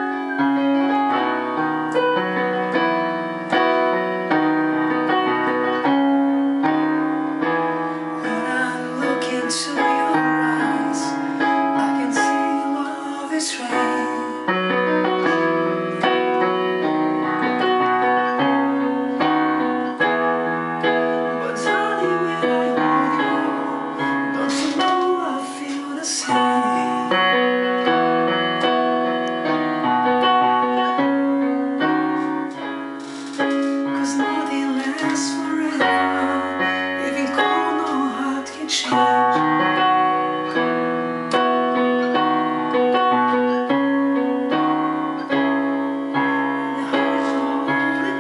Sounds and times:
Music: 0:00.0 - 0:48.2.

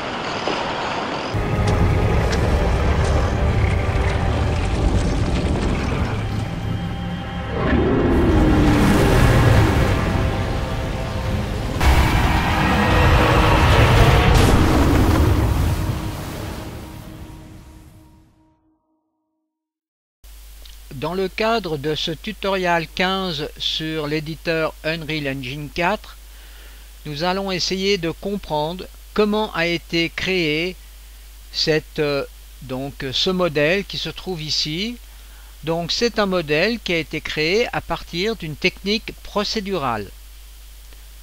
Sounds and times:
Speech: 0:20.9 - 0:26.2, 0:27.0 - 0:30.8, 0:31.5 - 0:35.0, 0:35.6 - 0:40.2.

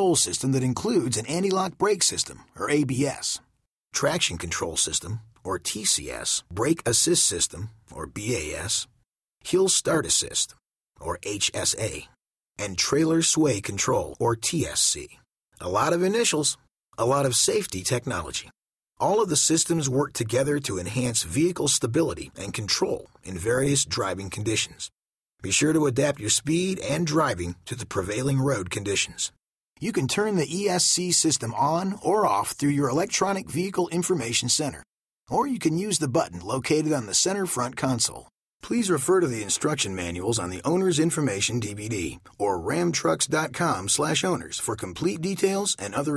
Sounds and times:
Speech: 0:00.0 - 0:46.1.

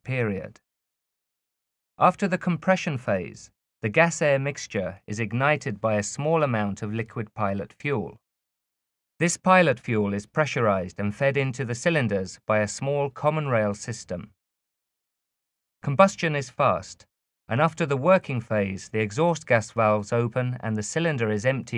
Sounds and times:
Speech: 0:00.0 - 0:00.6, 0:02.0 - 0:08.2, 0:09.2 - 0:14.4, 0:15.8 - 0:21.7.

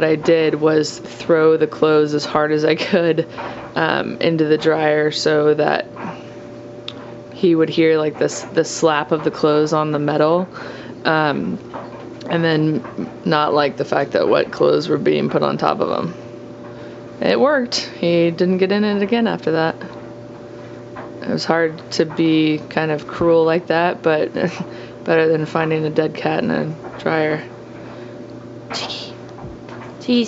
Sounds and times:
Speech: 0:00.0 - 0:05.9, 0:07.4 - 0:11.6, 0:12.2 - 0:16.2, 0:17.2 - 0:19.9, 0:21.2 - 0:27.5, 0:28.7 - 0:29.2, 0:30.0 - 0:30.2.

